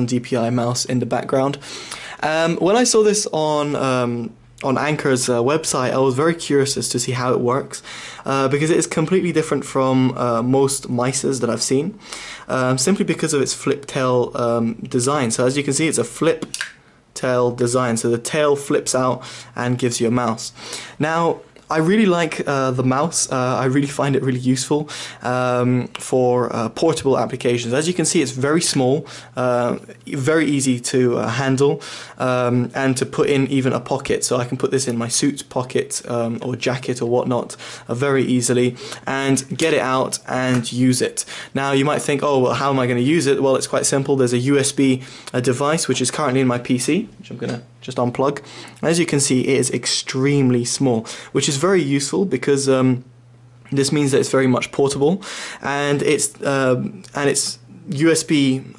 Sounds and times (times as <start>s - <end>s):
Speech: 0.0s - 1.6s, 2.2s - 53.1s, 53.7s - 58.7s.